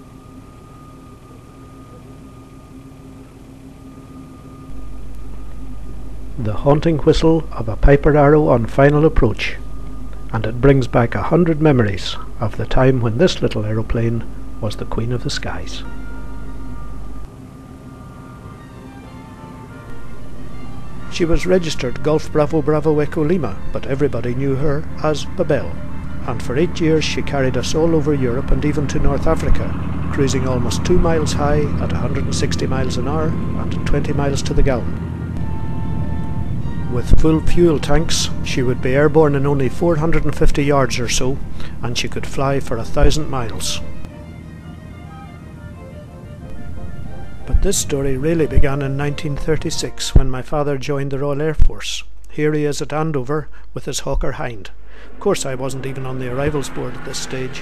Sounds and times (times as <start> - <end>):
Music: 0.0 - 51.6, 54.4 - 57.6
Speech: 6.4 - 9.6, 10.3 - 15.9, 21.1 - 34.9, 36.9 - 43.8, 47.5 - 57.6.